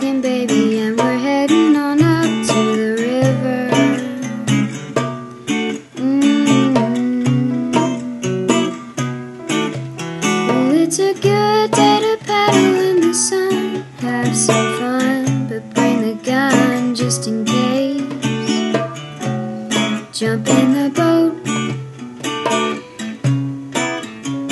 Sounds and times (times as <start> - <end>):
Music: 0.0 - 24.5.